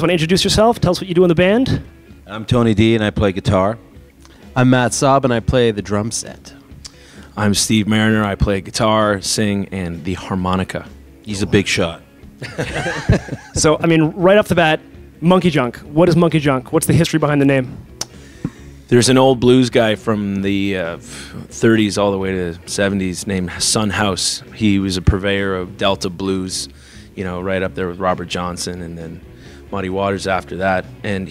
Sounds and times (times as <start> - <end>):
Speech: 0.0 - 3.8, 4.6 - 6.6, 7.4 - 12.0, 13.6 - 17.8, 18.9 - 31.3
Music: 0.0 - 31.3.